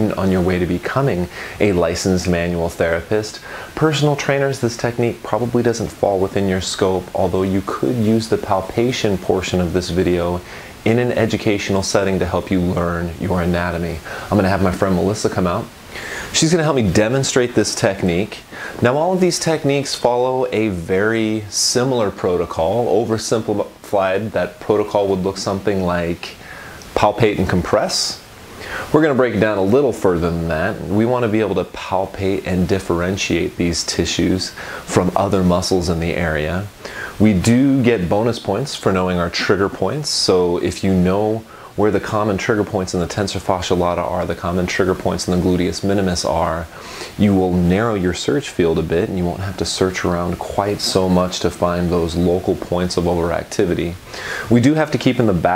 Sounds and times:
Speech: 0.0s - 55.5s.

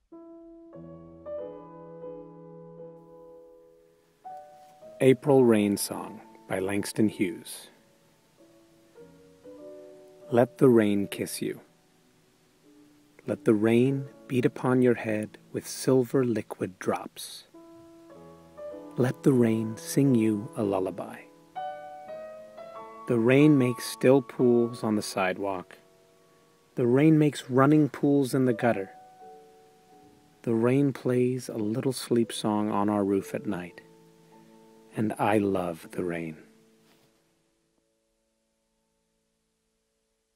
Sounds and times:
Speech: 5.0s - 7.8s, 10.3s - 11.7s, 13.2s - 17.6s, 19.0s - 21.3s, 23.1s - 25.8s, 26.8s - 29.0s, 30.4s - 33.8s, 34.9s - 36.5s.

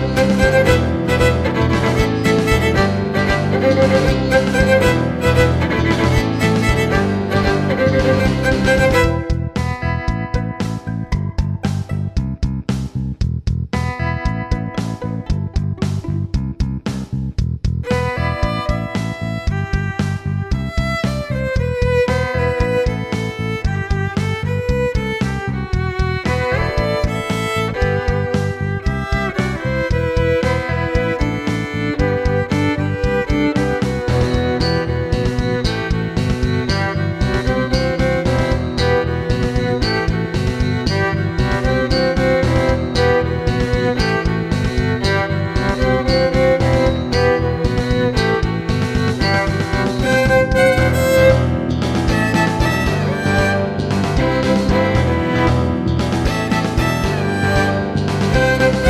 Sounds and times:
Violin, fiddle: 0.0s - 12.2s, 13.8s - 16.4s, 17.8s - 58.8s.

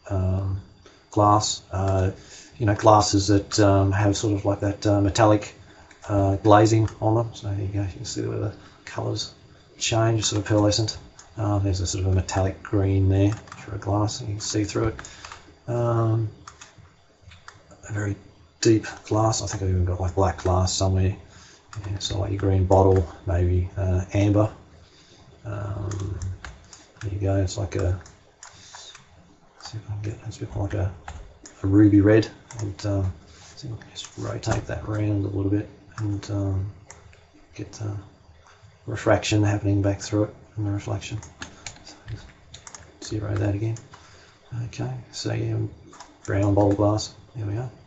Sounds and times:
Speech: 0.0s - 15.0s, 15.7s - 16.4s, 17.8s - 24.6s, 25.5s - 28.1s, 29.6s - 36.8s, 37.6s - 38.1s, 38.9s - 41.3s, 43.0s - 43.9s, 44.5s - 47.8s.

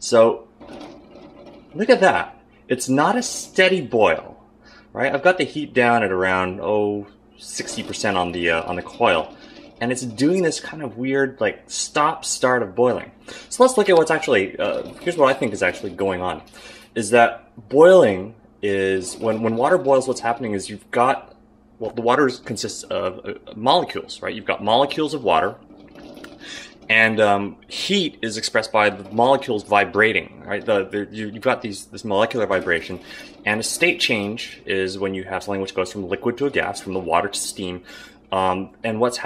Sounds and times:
Speech: 0.0s - 0.5s, 1.8s - 25.6s, 26.5s - 39.2s.

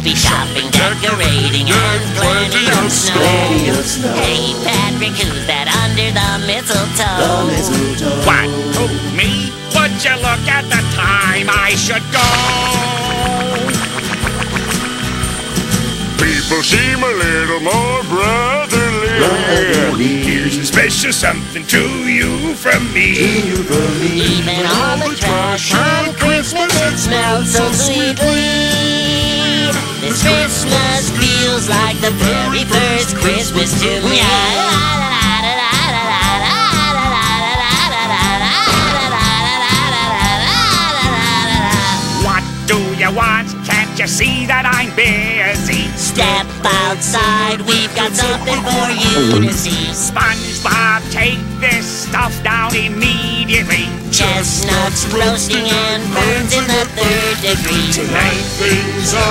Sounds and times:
Jingle (music): 0.0s - 59.3s.

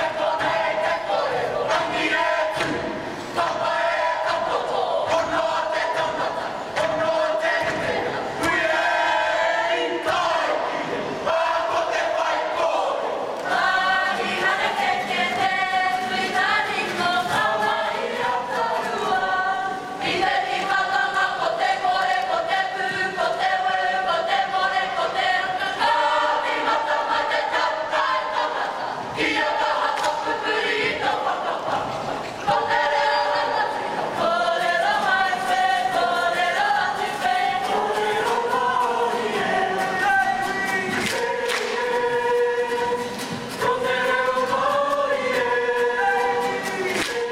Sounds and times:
Choir: 0.0s - 47.3s
Inside, public space: 0.0s - 47.3s.

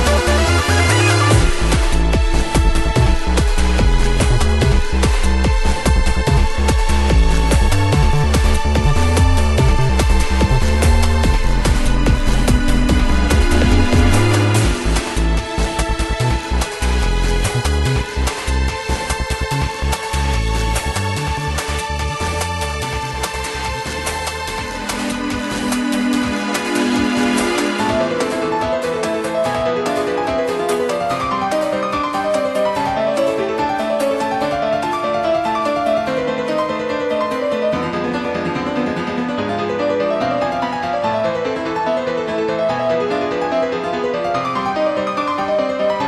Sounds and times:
Theme music: 0.0s - 46.0s.

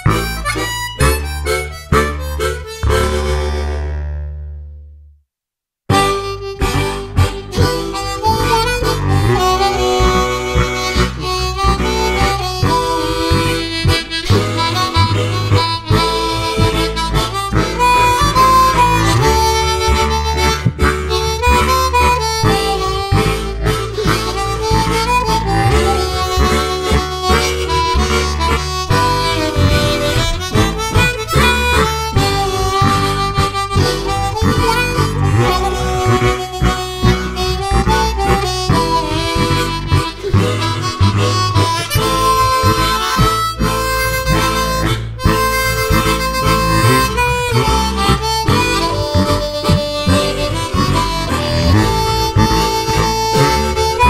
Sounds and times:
Wind instrument, woodwind instrument: 0.0s - 4.2s, 5.9s - 54.1s
Harmonica: 0.0s - 4.3s, 5.9s - 54.1s.

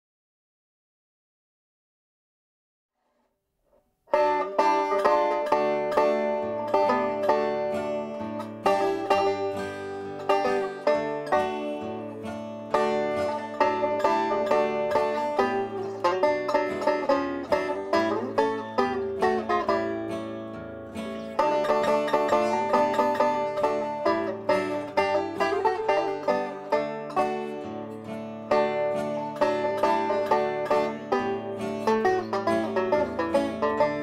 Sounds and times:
Banjo: 4.1s - 34.0s
Country: 4.1s - 34.0s.

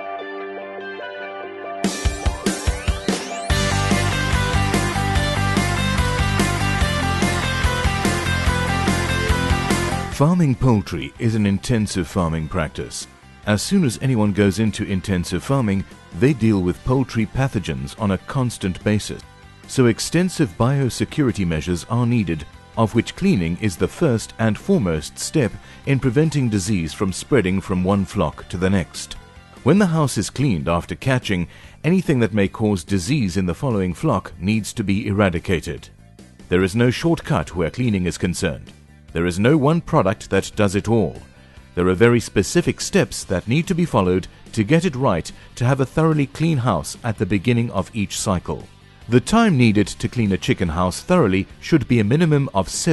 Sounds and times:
Music: 0.0s - 52.9s
Speech: 10.1s - 35.9s, 36.5s - 52.9s.

